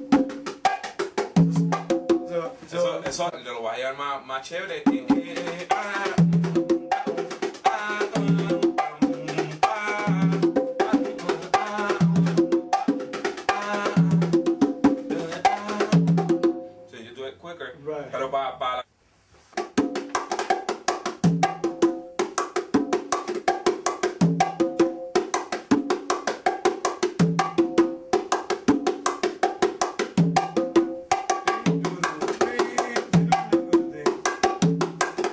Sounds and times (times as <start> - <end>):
Wood block: 0.0 - 2.4, 5.2 - 16.6, 19.6 - 35.3
Speech: 2.3 - 5.2, 16.9 - 18.9.